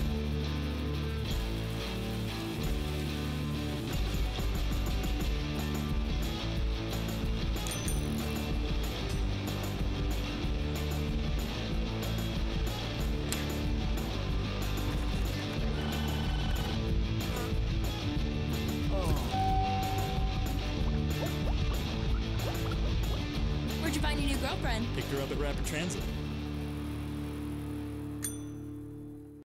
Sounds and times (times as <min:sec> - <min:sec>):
Bicycle: 0:00.0 - 0:23.4, 0:25.3 - 0:29.4
Music: 0:00.0 - 0:29.4
Speech: 0:23.8 - 0:26.0.